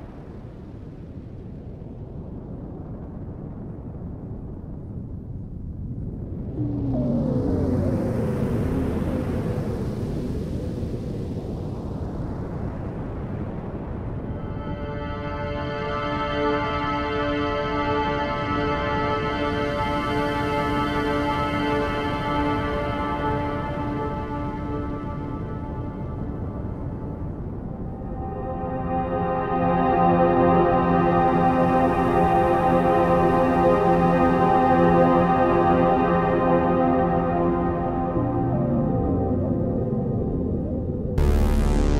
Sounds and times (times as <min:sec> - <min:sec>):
Music: 0:00.0 - 0:41.9.